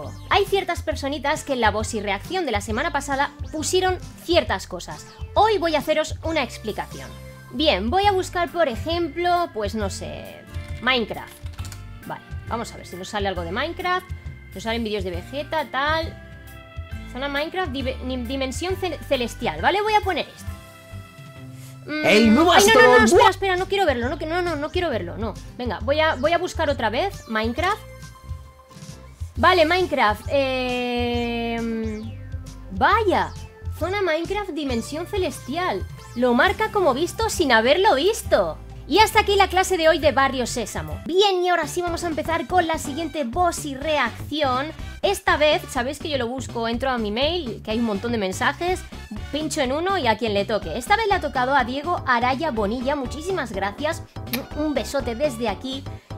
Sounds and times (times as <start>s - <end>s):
Female speech, woman speaking: 0.0s - 11.4s, 12.0s - 16.2s, 17.1s - 20.4s, 21.9s - 27.9s, 29.4s - 32.1s, 32.7s - 55.9s
Music: 0.0s - 56.1s.